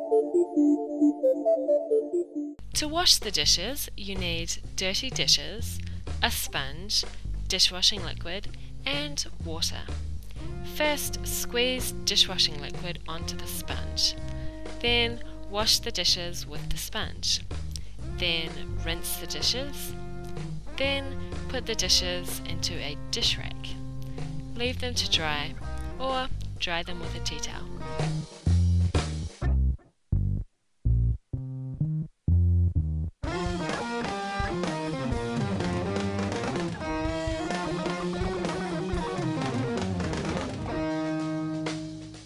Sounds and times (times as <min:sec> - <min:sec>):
Music: 0:00.0 - 0:42.2
Speech: 0:02.8 - 0:10.0, 0:10.7 - 0:14.2, 0:14.8 - 0:17.4, 0:18.2 - 0:20.0, 0:20.8 - 0:23.8, 0:24.6 - 0:27.7.